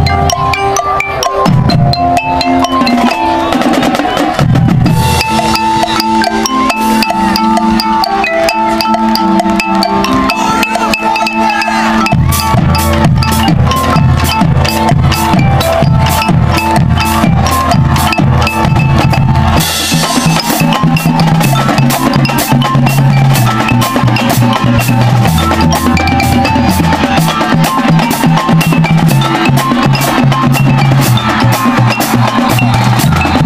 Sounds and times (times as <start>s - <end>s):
Percussion: 0.0s - 33.4s.